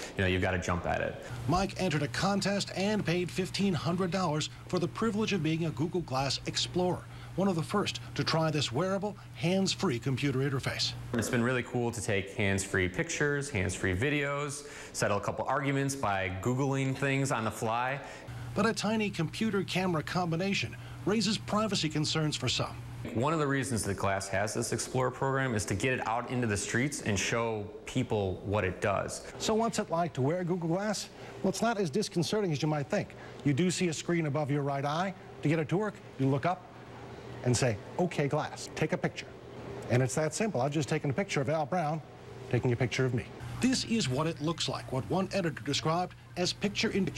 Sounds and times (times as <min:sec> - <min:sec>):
Speech: 0:00.2 - 0:36.6, 0:37.4 - 0:39.3, 0:39.9 - 0:47.1.